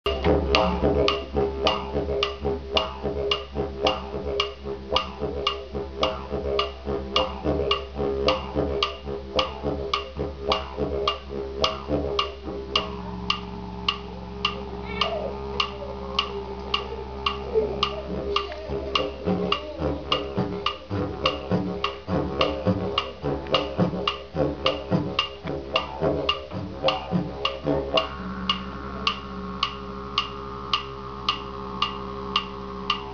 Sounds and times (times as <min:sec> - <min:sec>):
Didgeridoo: 0:00.0 - 0:33.1.